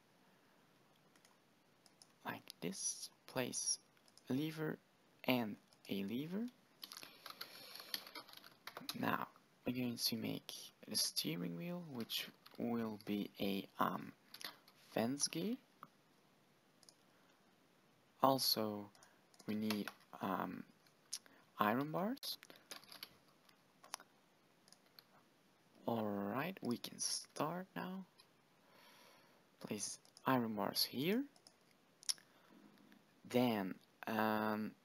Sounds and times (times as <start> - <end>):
Speech: 2.2 - 6.6, 8.8 - 14.2, 14.9 - 15.6, 18.2 - 20.7, 21.6 - 22.4, 25.8 - 28.1, 29.6 - 31.4, 33.3 - 34.8
Computer keyboard: 6.8 - 9.0, 22.5 - 23.2, 31.4 - 31.6.